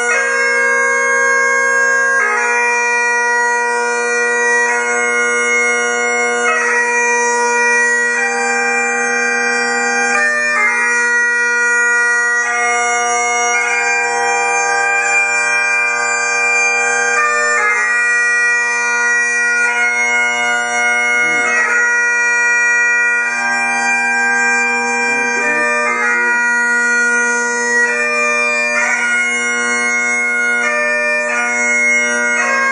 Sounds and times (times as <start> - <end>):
Bagpipes: 0.0 - 32.7
Wind instrument, woodwind instrument: 0.0 - 32.7.